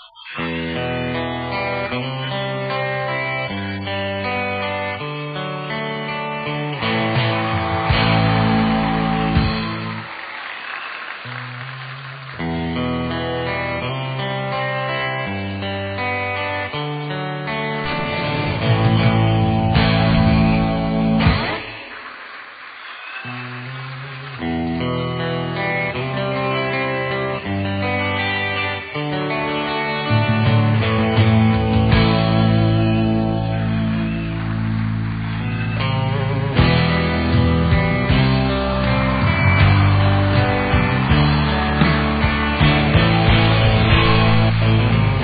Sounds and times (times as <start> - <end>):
Electric guitar: 0.0 - 45.2.